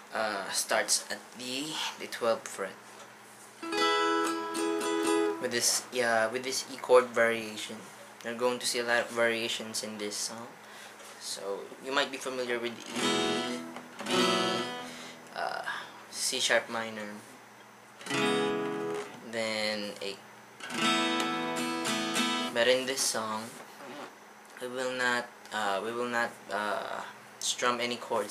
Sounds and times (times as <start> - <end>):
Speech: 0.1 - 2.8, 5.4 - 10.6, 11.2 - 12.9, 15.3 - 17.3, 19.2 - 20.2, 22.6 - 23.6, 24.6 - 28.3.